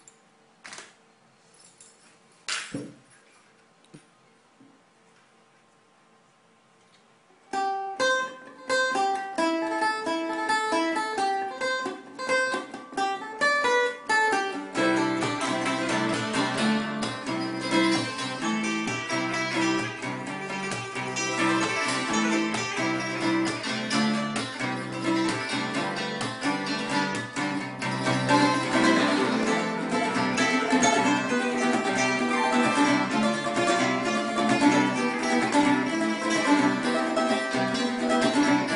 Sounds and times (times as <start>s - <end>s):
Music: 7.5s - 38.7s.